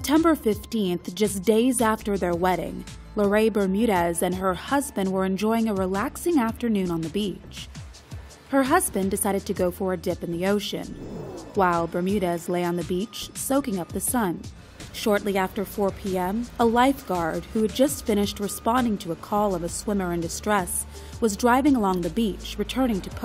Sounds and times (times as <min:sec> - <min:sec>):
Speech: 0:00.0 - 0:07.7, 0:08.5 - 0:10.9, 0:11.6 - 0:14.4, 0:15.0 - 0:23.2
Music: 0:00.0 - 0:23.2.